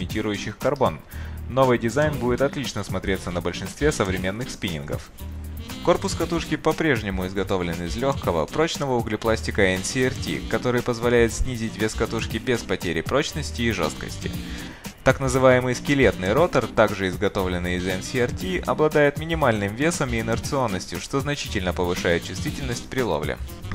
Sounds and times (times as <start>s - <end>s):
Speech: 0.0s - 5.1s, 5.8s - 23.4s
Music: 0.0s - 23.7s.